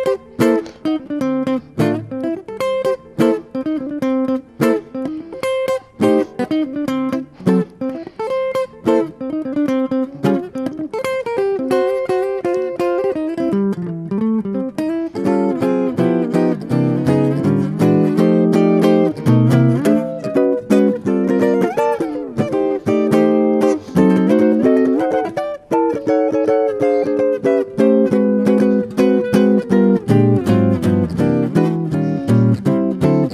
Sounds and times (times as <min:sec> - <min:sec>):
Electric guitar: 0:00.0 - 0:33.3
Jazz: 0:00.0 - 0:33.3
Strum: 0:00.0 - 0:33.3.